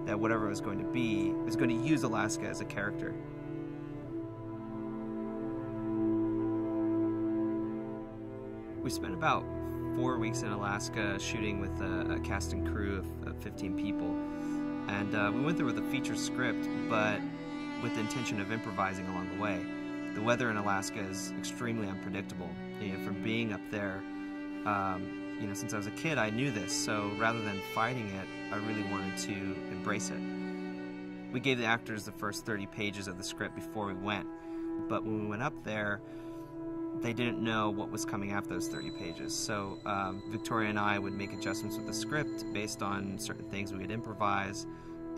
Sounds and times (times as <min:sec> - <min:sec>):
Speech: 0:00.0 - 0:03.2, 0:08.8 - 0:14.2, 0:14.9 - 0:17.2, 0:17.8 - 0:24.0, 0:24.7 - 0:30.2, 0:31.4 - 0:36.0, 0:37.0 - 0:45.1
Music: 0:00.0 - 0:45.1.